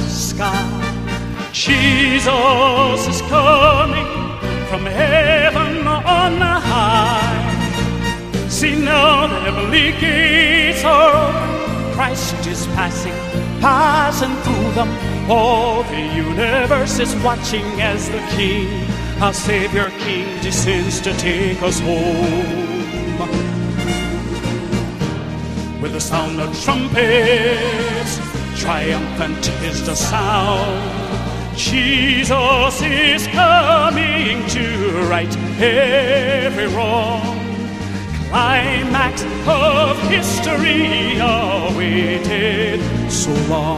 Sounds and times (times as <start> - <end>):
Music: 0.0 - 43.7.